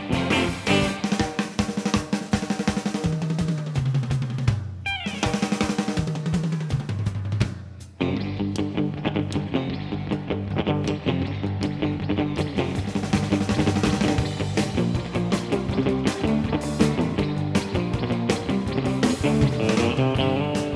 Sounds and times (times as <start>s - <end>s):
Guitar: 0.0s - 3.0s, 4.8s - 6.6s, 7.8s - 20.7s
Drum roll: 0.0s - 8.0s, 12.4s - 20.7s
Drum kit: 0.0s - 20.7s
Bass drum: 3.0s - 20.7s.